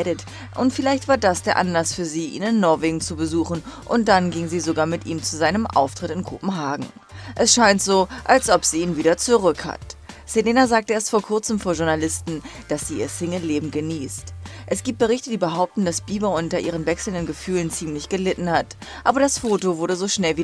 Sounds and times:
Speech: 0.0 - 20.4.

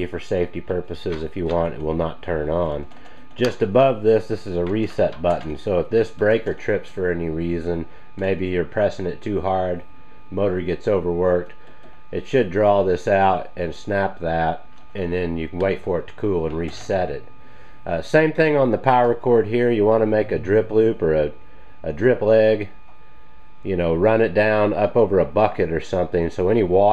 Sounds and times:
Speech: 0.0 - 17.3, 17.9 - 22.8, 23.6 - 26.9.

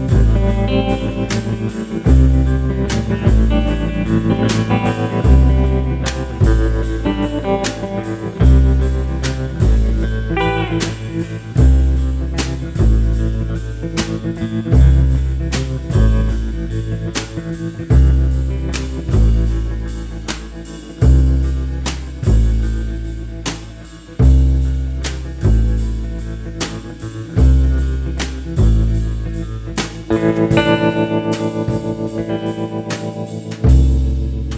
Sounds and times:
Steel guitar, slide guitar: 0.0 - 34.5.

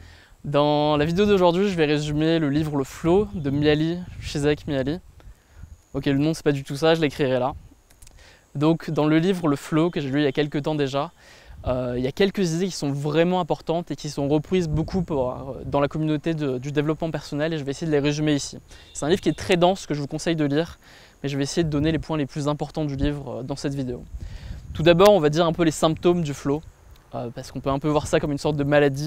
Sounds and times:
Speech: 0.5 - 5.0, 6.0 - 7.6, 8.6 - 24.1, 24.8 - 29.0.

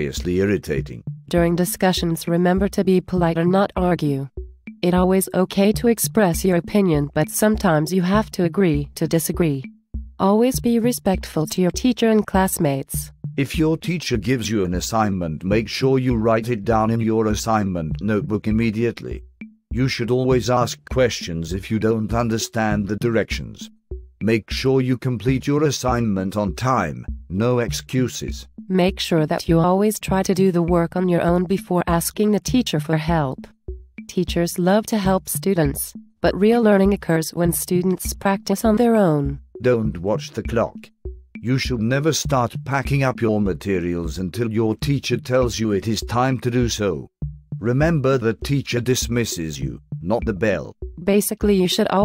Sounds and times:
Percussion: 0.0 - 52.0.

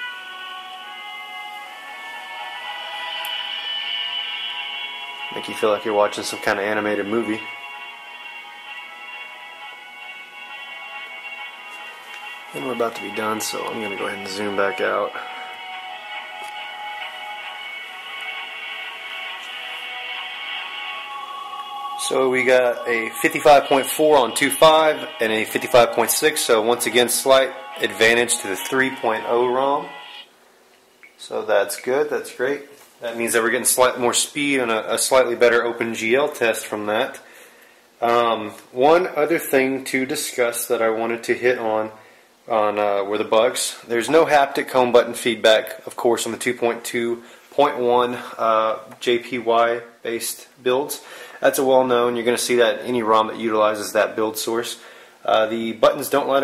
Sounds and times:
Music: 0.0 - 30.3
Speech: 5.3 - 7.5, 12.6 - 15.3, 22.0 - 29.9, 31.2 - 37.2, 38.0 - 56.4.

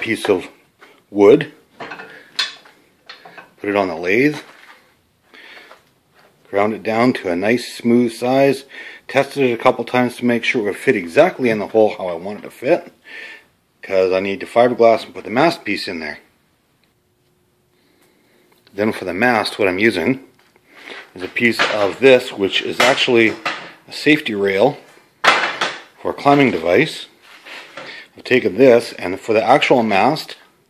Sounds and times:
Speech: 0.0 - 1.6, 3.6 - 4.5, 6.5 - 13.0, 13.8 - 16.3, 18.7 - 20.3, 21.2 - 24.8, 26.0 - 27.2, 28.2 - 30.5.

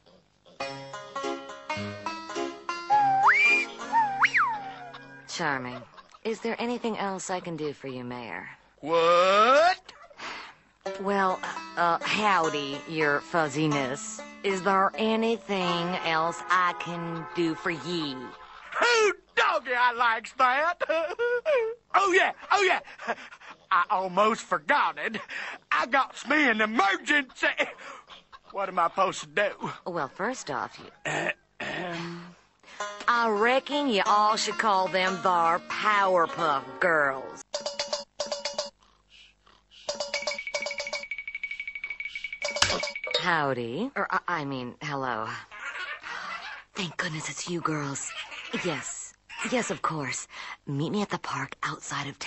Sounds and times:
Music: 0.6 - 5.3, 10.9 - 16.5, 32.8 - 38.8
Speech: 5.3 - 9.9, 11.0 - 20.9, 33.1 - 37.4, 43.2 - 45.5, 46.8 - 52.2.

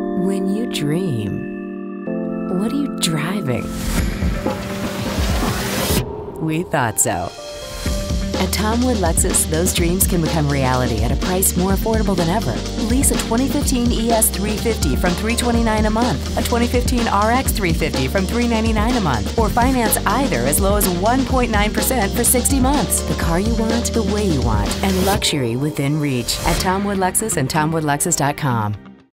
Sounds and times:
Music: 0.0 - 29.1
Speech: 0.2 - 1.4, 2.5 - 3.7, 6.4 - 7.4, 8.4 - 28.8.

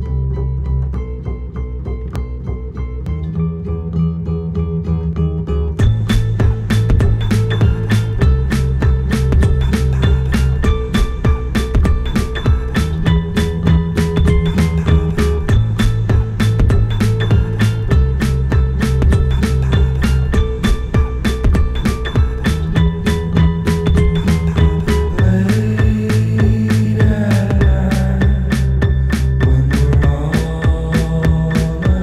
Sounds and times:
Music: 0.0 - 32.0.

